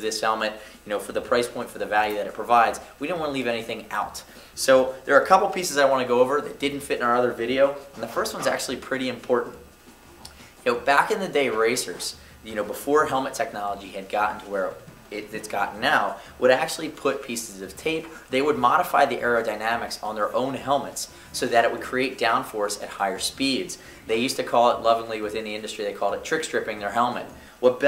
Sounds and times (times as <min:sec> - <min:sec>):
Speech: 0:00.0 - 0:09.6, 0:10.6 - 0:27.8.